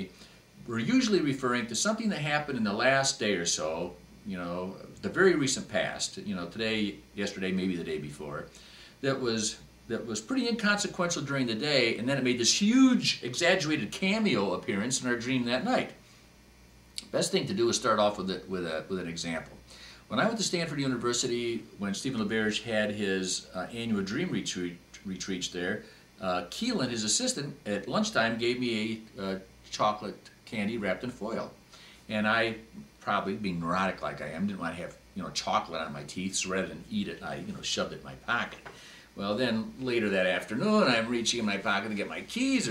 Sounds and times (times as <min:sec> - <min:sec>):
Speech: 0:00.0 - 0:16.0, 0:17.0 - 0:42.7
Inside, small room: 0:00.0 - 0:42.7.